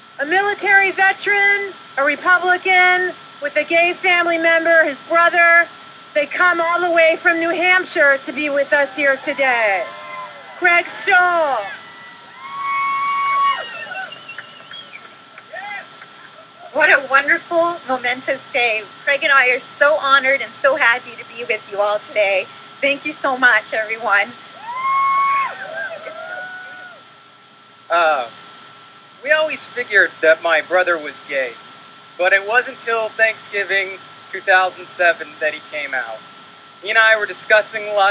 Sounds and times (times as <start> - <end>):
Narration, monologue: 0.0 - 9.9, 10.6 - 11.8, 15.1 - 24.6, 27.2 - 38.1
Female speech, woman speaking: 0.2 - 11.8, 16.8 - 24.4, 29.2 - 31.5, 32.2 - 36.2, 36.8 - 38.1
Male speech, man speaking: 27.9 - 28.3, 29.3 - 31.6, 32.2 - 36.2, 36.8 - 38.1.